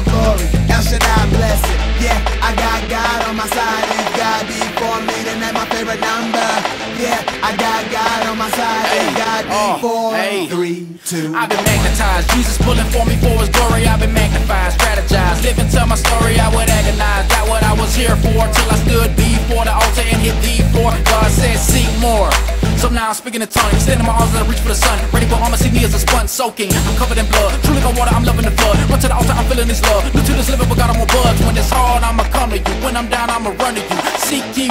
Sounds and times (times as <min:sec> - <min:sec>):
Music: 0:00.0 - 0:10.4, 0:11.1 - 0:34.7.